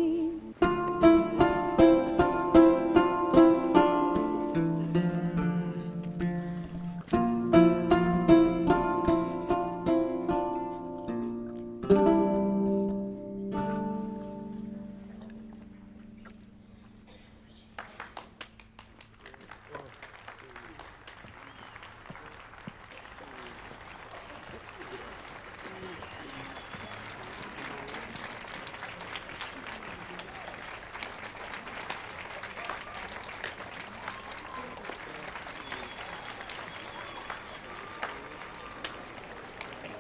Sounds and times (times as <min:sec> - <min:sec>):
Pizzicato: 0:00.0 - 0:17.5.